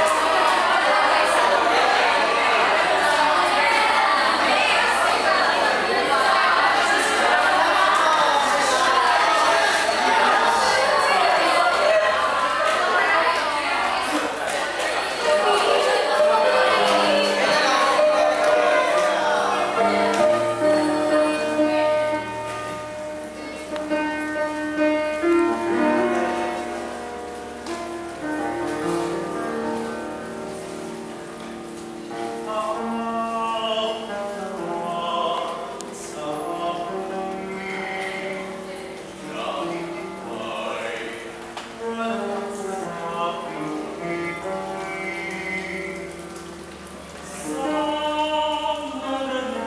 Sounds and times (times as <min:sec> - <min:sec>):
Music: 0:00.0 - 0:49.6
Male singing: 0:32.3 - 0:46.2, 0:47.3 - 0:49.6.